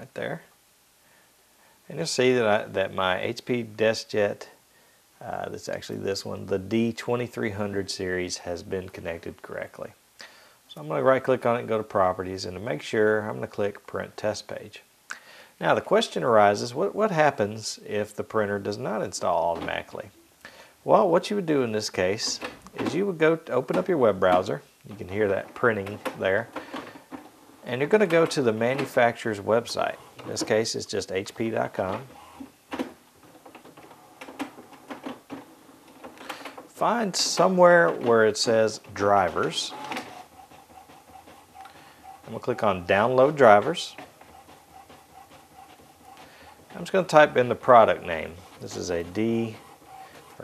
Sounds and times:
Speech: 0:00.0 - 0:00.5, 0:01.9 - 0:04.6, 0:05.2 - 0:10.0, 0:10.7 - 0:14.9, 0:15.6 - 0:20.2, 0:20.8 - 0:26.6, 0:27.6 - 0:32.2, 0:36.7 - 0:39.8, 0:42.2 - 0:44.0, 0:46.7 - 0:49.7.

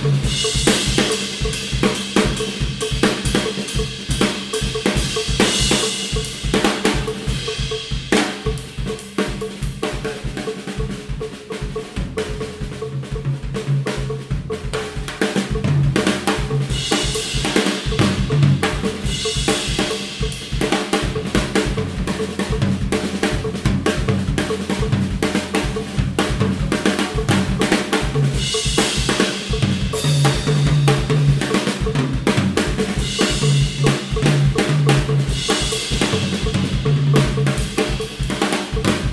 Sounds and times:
Bass drum: 0:00.0 - 0:39.1
Drum kit: 0:00.0 - 0:39.1
Drum roll: 0:00.0 - 0:39.1.

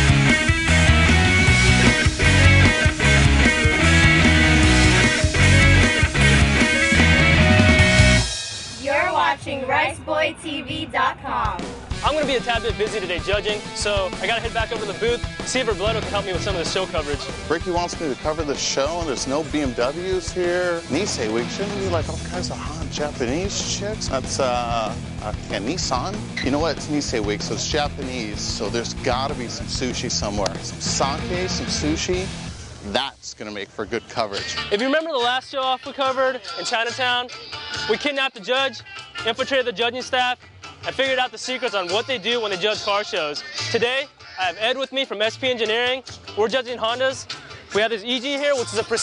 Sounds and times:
Music: 0:00.0 - 0:49.0
Speech: 0:08.8 - 0:32.3, 0:32.9 - 0:37.3, 0:37.9 - 0:49.0.

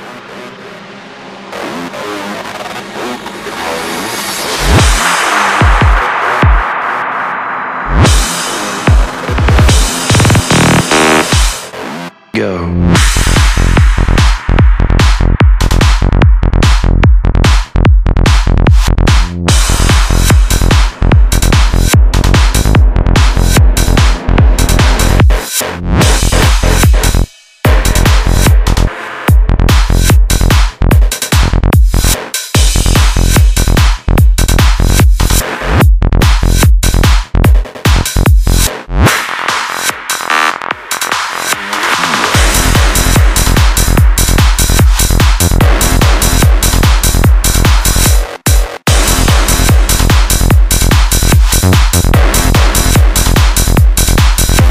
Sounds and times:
Music: 0:00.0 - 0:54.7.

